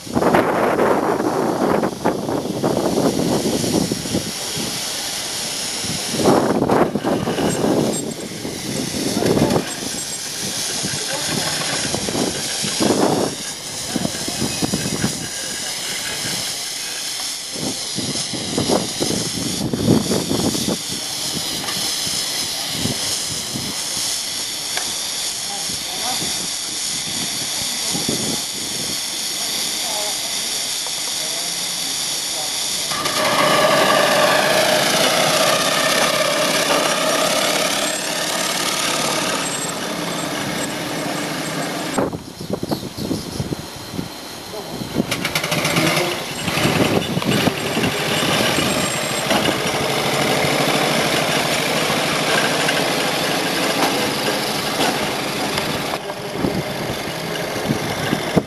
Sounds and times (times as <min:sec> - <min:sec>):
Speech: 0:10.8 - 0:11.9, 0:13.8 - 0:16.8, 0:25.4 - 0:28.6, 0:29.2 - 0:33.0, 0:44.5 - 0:44.9.